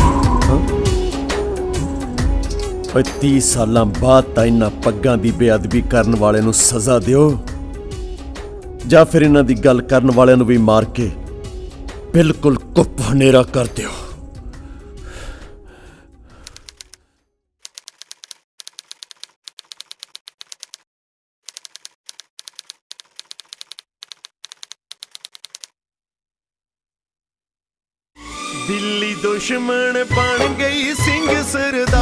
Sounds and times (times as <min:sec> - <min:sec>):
Music: 0:00.0 - 0:17.3, 0:28.2 - 0:32.0.